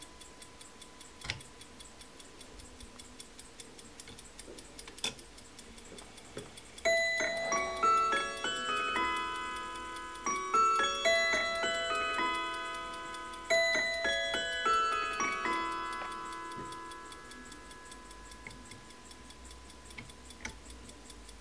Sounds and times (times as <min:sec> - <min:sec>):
Tick-tock: 0:00.0 - 0:21.4
Music: 0:06.8 - 0:19.2.